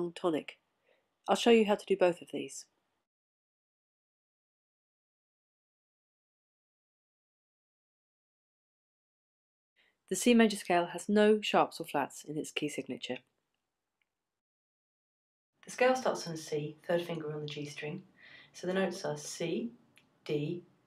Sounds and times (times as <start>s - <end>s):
Speech: 0.0s - 0.6s, 1.3s - 2.7s, 10.1s - 13.2s, 15.7s - 20.6s.